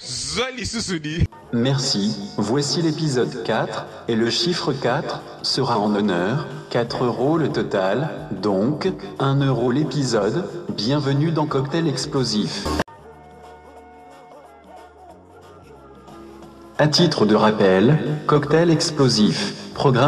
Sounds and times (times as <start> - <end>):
Speech: 0.0 - 12.8, 16.8 - 20.0
Music: 0.0 - 20.0.